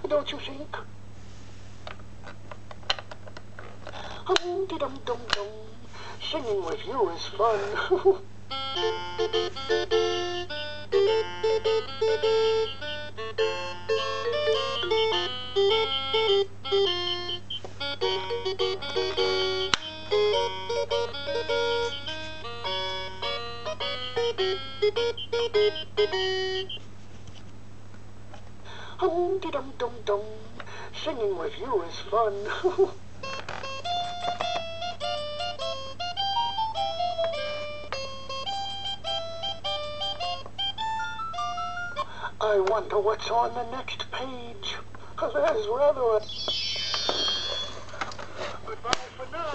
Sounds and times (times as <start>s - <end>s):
Speech: 0.0s - 0.9s, 4.3s - 8.2s, 29.0s - 33.0s, 42.4s - 46.2s, 48.7s - 49.5s
Inside, small room: 0.0s - 49.5s
Music: 8.5s - 26.8s, 33.2s - 42.1s, 46.3s - 47.8s.